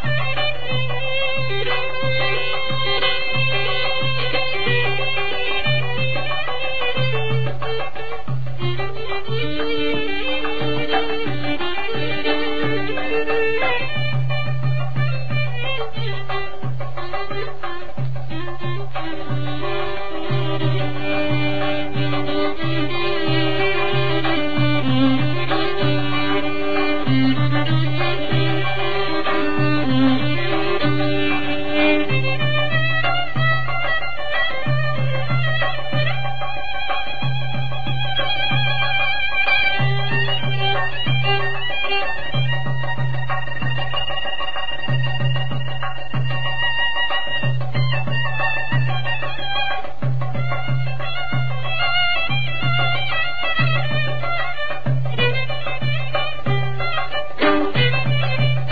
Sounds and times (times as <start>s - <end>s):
Traditional music: 0.0s - 58.7s.